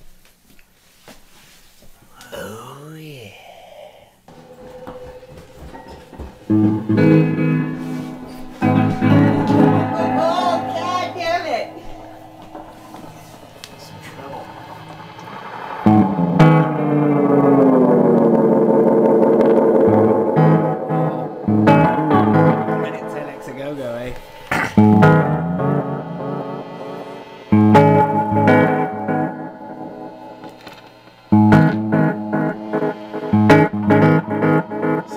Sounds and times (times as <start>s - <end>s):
Music: 4.3s - 14.5s, 15.2s - 35.1s.